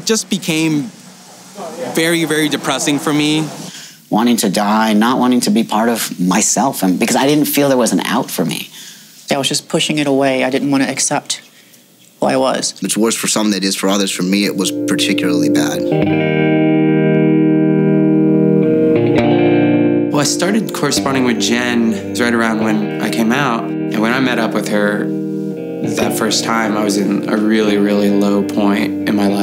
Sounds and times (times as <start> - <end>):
Speech: 0.0 - 0.9, 1.6 - 11.5, 12.2 - 15.9, 20.2 - 25.1, 25.9 - 29.4
Music: 14.0 - 29.4.